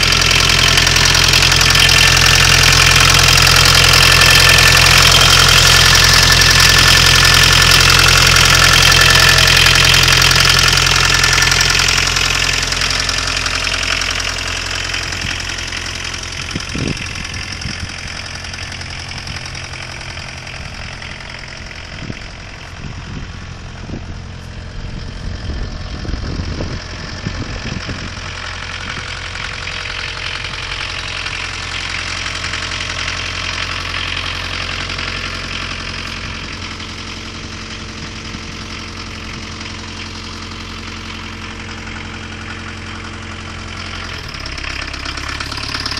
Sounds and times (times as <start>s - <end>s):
Car: 0.0s - 45.9s
Engine: 0.0s - 45.9s.